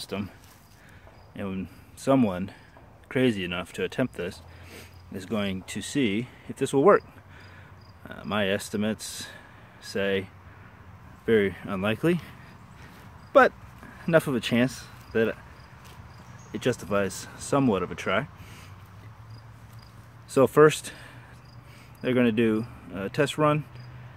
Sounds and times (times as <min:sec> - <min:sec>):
Speech: 0:00.0 - 0:00.4, 0:01.4 - 0:04.4, 0:05.1 - 0:07.0, 0:08.0 - 0:10.3, 0:11.2 - 0:12.3, 0:13.3 - 0:15.4, 0:16.6 - 0:18.3, 0:20.3 - 0:21.0, 0:22.0 - 0:23.7
Outside, urban or manmade: 0:00.0 - 0:24.1.